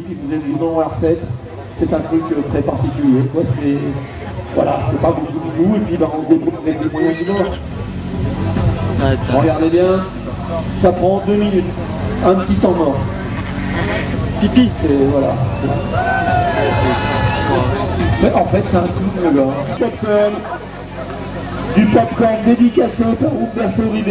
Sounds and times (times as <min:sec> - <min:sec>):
Speech: 0:00.0 - 0:07.6, 0:08.9 - 0:13.1, 0:17.5 - 0:24.1
Music: 0:13.0 - 0:24.1.